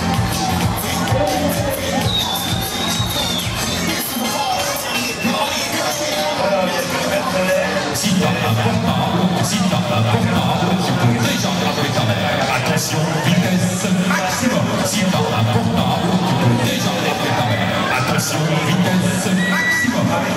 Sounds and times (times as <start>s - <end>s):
Music: 0.0s - 20.3s
Speech: 0.7s - 20.3s.